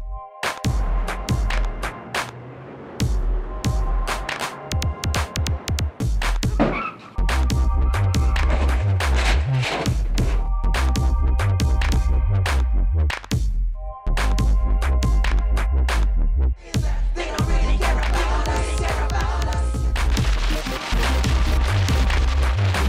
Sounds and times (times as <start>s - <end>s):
Dubstep: 3.0s - 12.0s, 16.8s - 22.8s.